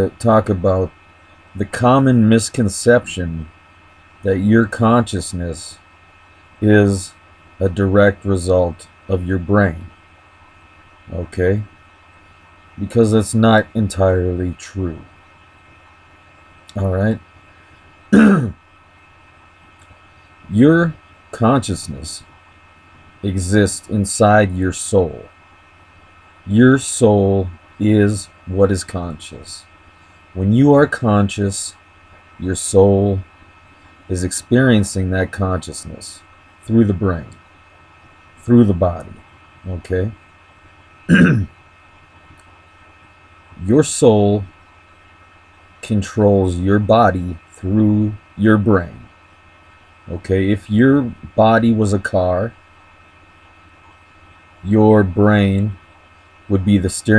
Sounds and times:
Speech: 0:00.0 - 0:00.9, 0:01.6 - 0:03.5, 0:04.2 - 0:05.8, 0:06.6 - 0:09.9, 0:11.1 - 0:11.8, 0:12.8 - 0:15.1, 0:16.7 - 0:17.2, 0:18.2 - 0:18.6, 0:20.5 - 0:22.3, 0:23.2 - 0:25.3, 0:26.5 - 0:29.7, 0:30.4 - 0:31.8, 0:32.4 - 0:33.3, 0:34.1 - 0:37.4, 0:38.4 - 0:40.2, 0:41.1 - 0:41.5, 0:43.6 - 0:44.5, 0:45.8 - 0:49.1, 0:50.1 - 0:52.6, 0:54.6 - 0:55.8, 0:56.5 - 0:57.1.

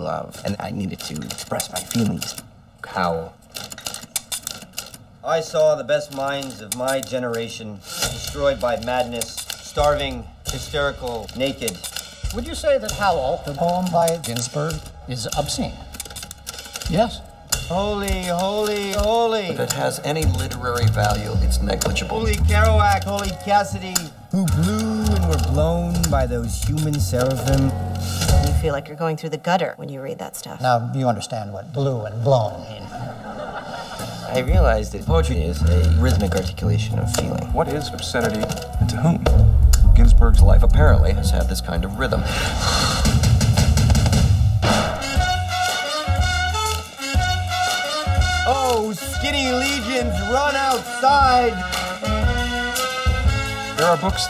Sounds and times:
Music: 0:00.0 - 0:54.3
Speech: 0:16.9 - 0:32.8, 0:34.3 - 0:42.3.

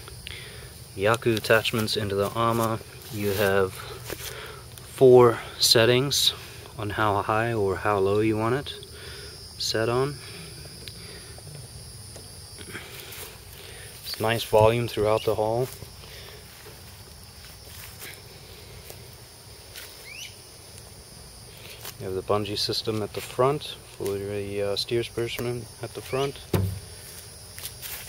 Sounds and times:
Speech: 0:01.0 - 0:03.9, 0:05.0 - 0:08.8, 0:09.6 - 0:10.2, 0:14.1 - 0:15.8, 0:22.0 - 0:26.4.

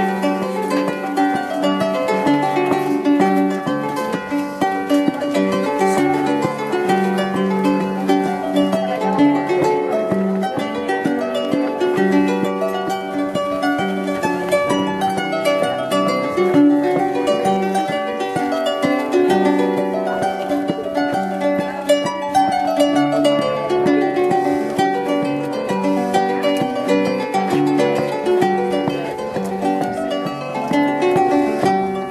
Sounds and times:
Harp: 0:00.0 - 0:32.1
Speech: 0:00.0 - 0:32.1.

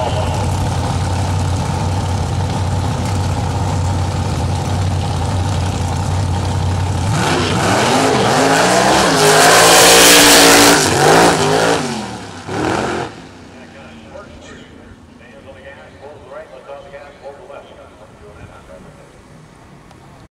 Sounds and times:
Speech: 0:13.6 - 0:19.2.

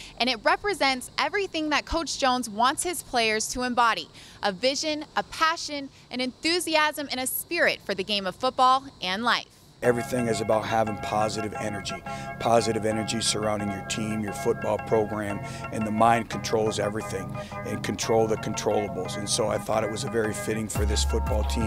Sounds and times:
Speech: 0:00.2 - 0:21.6
Music: 0:09.8 - 0:21.6.

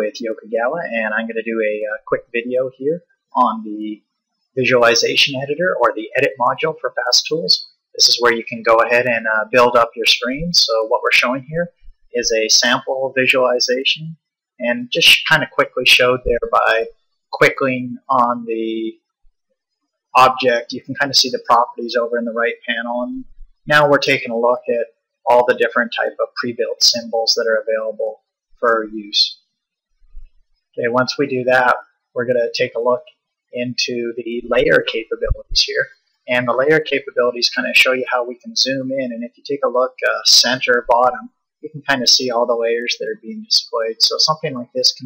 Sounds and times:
Speech: 0:00.0 - 0:04.0, 0:04.6 - 0:18.9, 0:20.2 - 0:29.4, 0:30.8 - 0:45.0.

